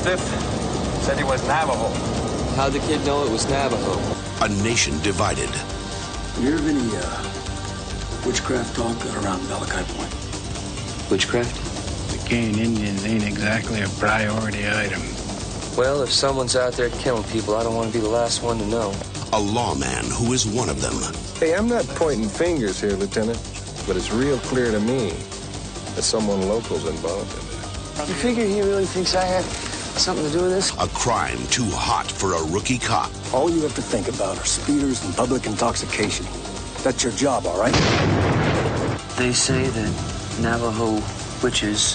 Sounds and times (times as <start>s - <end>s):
Music: 0.0s - 41.9s.